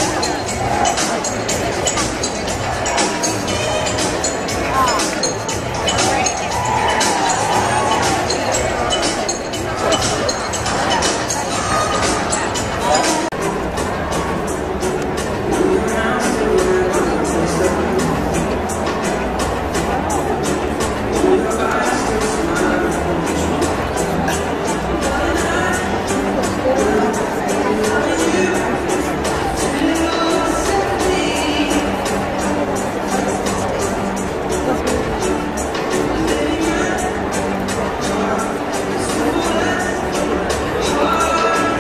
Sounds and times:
Inside, public space: 0:00.0 - 0:41.8
Music: 0:00.0 - 0:41.8
Speech: 0:00.0 - 0:41.8.

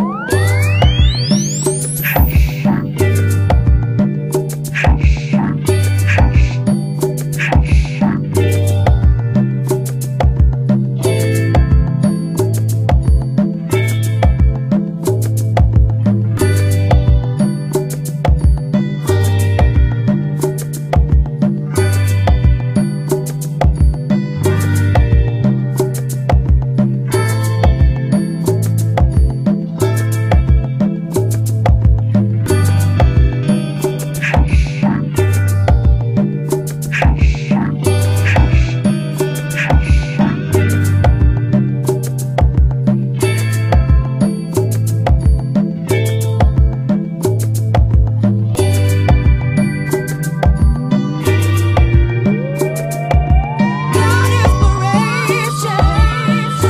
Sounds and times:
Music: 0:00.0 - 0:56.6.

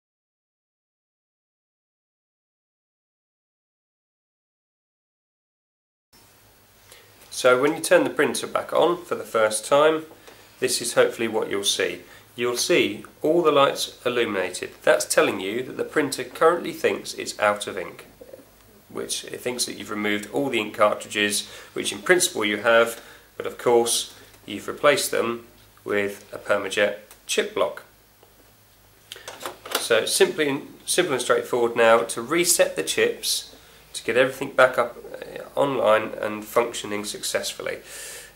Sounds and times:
Speech: 0:07.3 - 0:18.2, 0:18.9 - 0:27.9, 0:29.8 - 0:37.9.

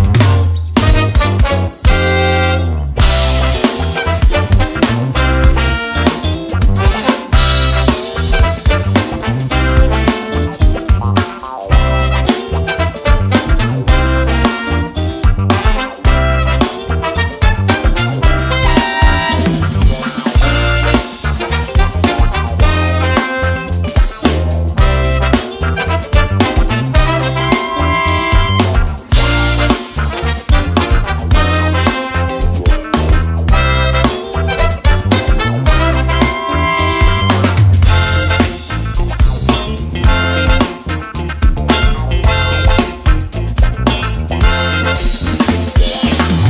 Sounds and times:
Bass drum: 0:00.0 - 0:46.5
Drum kit: 0:00.0 - 0:46.5
Snare drum: 0:06.8 - 0:10.3, 0:17.5 - 0:23.4, 0:24.2 - 0:39.4.

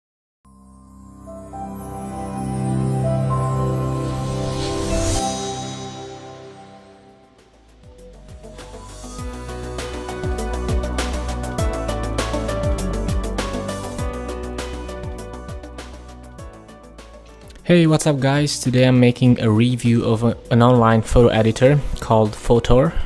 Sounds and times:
Music: 0:00.4 - 0:23.0.

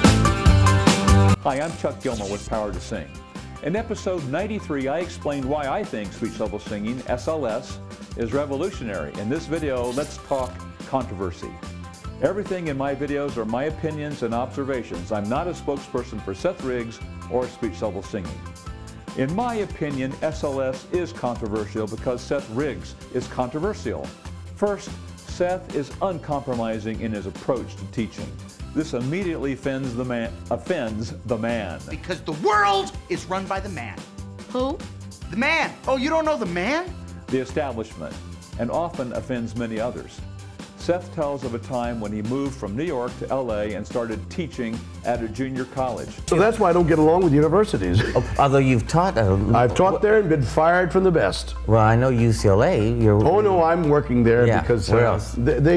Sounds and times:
Music: 0:00.0 - 0:55.7
Male speech, man speaking: 0:01.4 - 0:11.6, 0:12.2 - 0:18.4, 0:19.2 - 0:34.0, 0:35.3 - 0:40.2, 0:40.8 - 0:55.7.

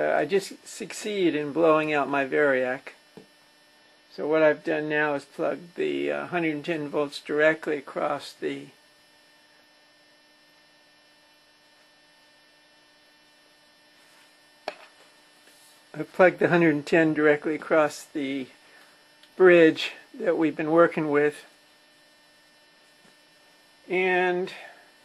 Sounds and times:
Speech: 0:00.0 - 0:03.0, 0:04.1 - 0:08.8, 0:15.9 - 0:18.6, 0:19.4 - 0:21.5, 0:23.9 - 0:24.8.

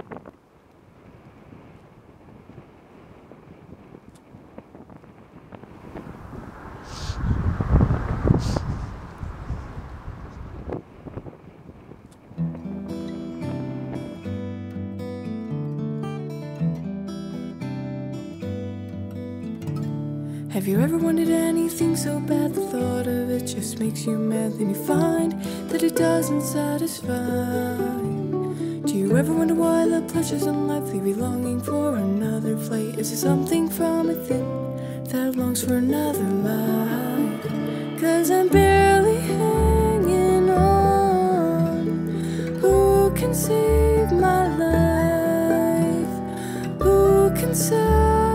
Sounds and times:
New-age music: 0:20.6 - 0:48.3.

